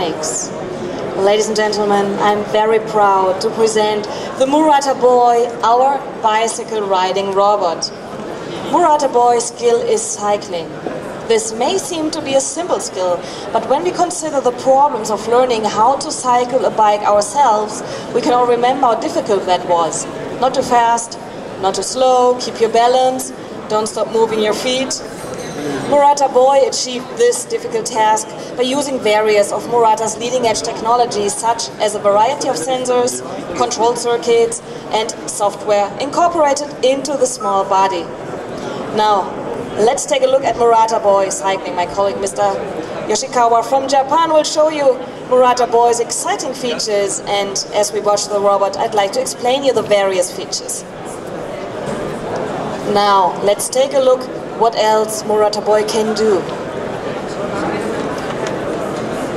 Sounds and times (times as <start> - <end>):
Speech: 0.0 - 0.6, 1.2 - 7.9, 8.6 - 38.1, 39.0 - 50.9, 52.9 - 56.6.